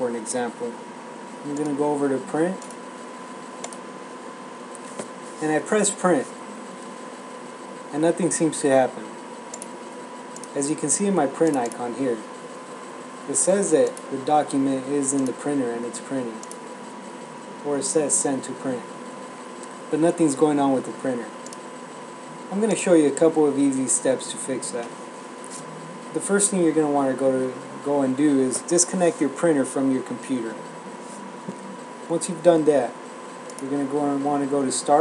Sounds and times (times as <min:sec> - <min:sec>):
Speech: 0:00.0 - 0:00.8, 0:01.4 - 0:02.6, 0:05.4 - 0:06.4, 0:07.9 - 0:09.1, 0:10.6 - 0:12.3, 0:13.3 - 0:16.5, 0:17.6 - 0:18.9, 0:19.9 - 0:21.4, 0:22.5 - 0:24.9, 0:26.2 - 0:30.7, 0:32.1 - 0:33.0, 0:33.6 - 0:35.0.